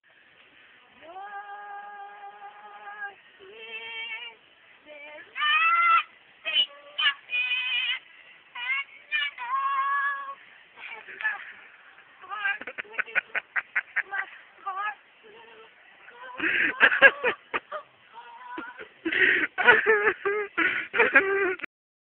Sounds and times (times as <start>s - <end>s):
Female singing: 0.8s - 11.5s, 12.2s - 13.3s, 14.0s - 17.1s, 18.1s - 18.9s.